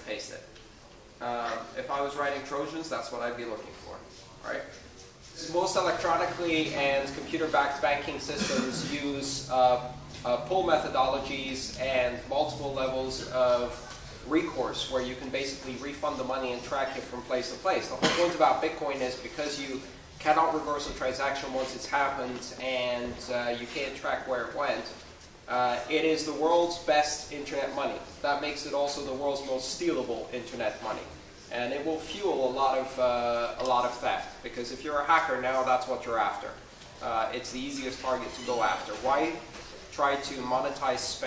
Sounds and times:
Speech: 0.0s - 0.6s, 1.2s - 41.2s.

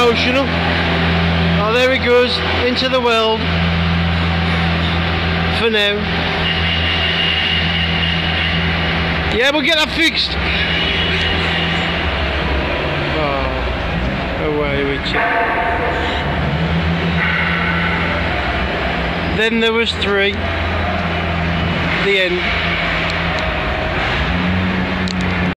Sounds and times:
Speech: 0.0s - 0.5s, 1.6s - 3.5s, 5.6s - 6.1s, 9.3s - 10.4s, 13.1s - 13.7s, 14.4s - 15.2s, 19.4s - 20.4s, 22.0s - 22.5s
Vehicle: 0.0s - 25.5s.

